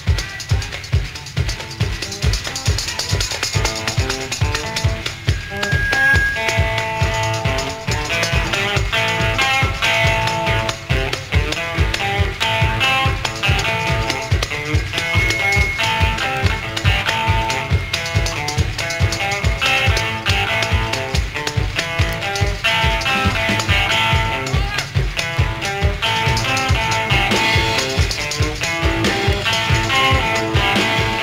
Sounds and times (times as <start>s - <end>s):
Guitar: 0.0s - 31.2s.